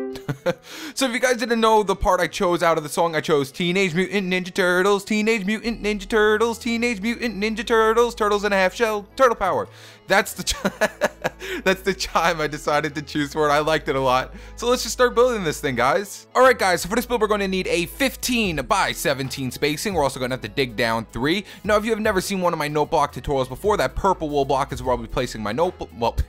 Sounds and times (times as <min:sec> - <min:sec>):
Music: 0:00.0 - 0:26.2
Speech: 0:01.0 - 0:10.7, 0:11.6 - 0:26.2.